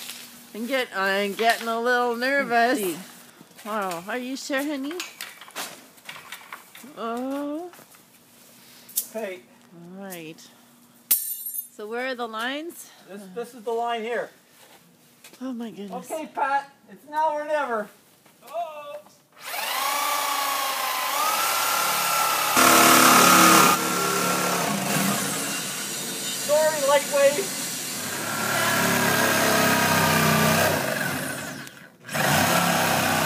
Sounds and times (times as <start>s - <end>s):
Outside, urban or manmade: 0.0s - 33.2s
Drill: 19.4s - 33.2s
Speech: 26.5s - 27.5s.